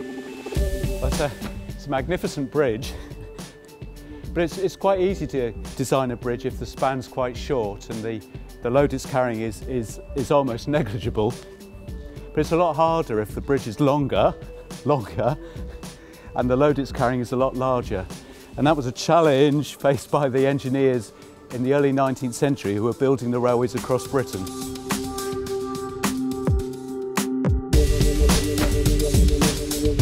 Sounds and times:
Music: 0.0 - 30.0
Speech: 1.0 - 3.0, 4.4 - 11.4, 12.4 - 15.4, 16.4 - 24.5.

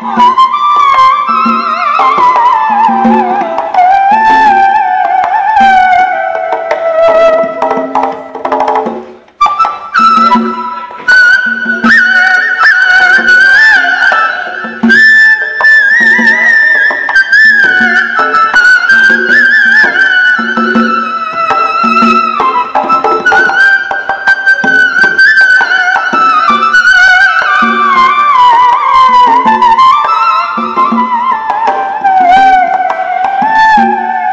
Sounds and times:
Music: 0.0 - 34.3.

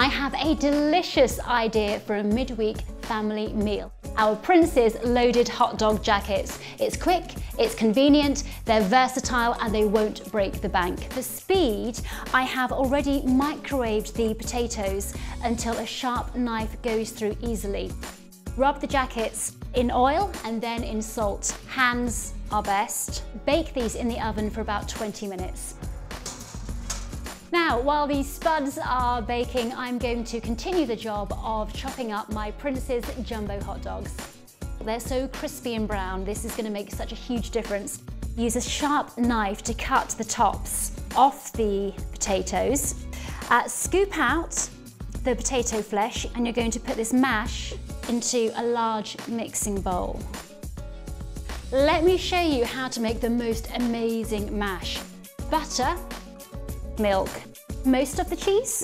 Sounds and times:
Speech: 0.0 - 18.0, 18.6 - 25.8, 27.5 - 34.2, 34.8 - 50.2, 51.7 - 56.0, 57.0 - 58.8
Music: 0.0 - 58.8.

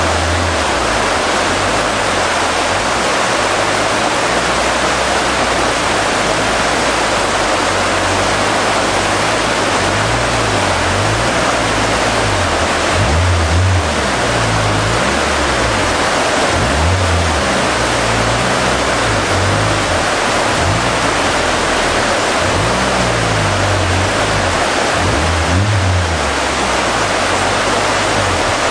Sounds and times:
Stream: 0.0 - 28.7.

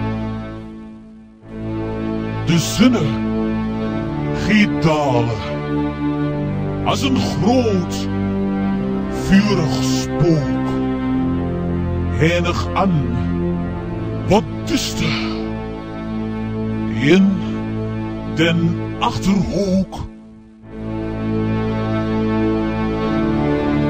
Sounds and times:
Music: 0.0 - 23.8
Speech: 2.5 - 3.2, 4.4 - 5.5, 6.9 - 8.1, 9.1 - 10.8, 12.2 - 13.3, 14.3 - 15.5, 16.9 - 17.6, 18.4 - 20.1.

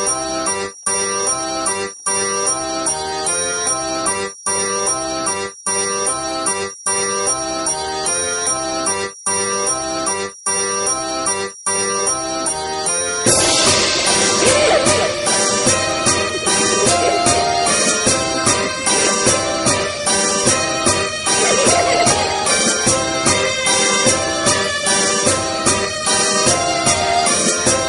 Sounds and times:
Music: 0.0 - 27.8.

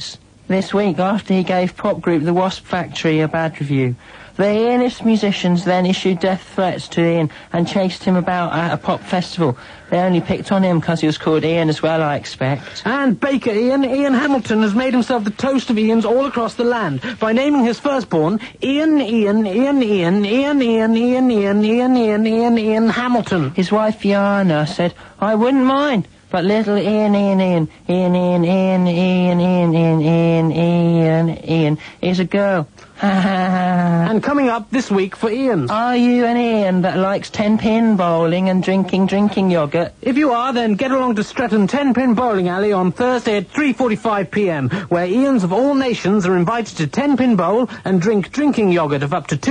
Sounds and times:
Speech: 0.0 - 49.5.

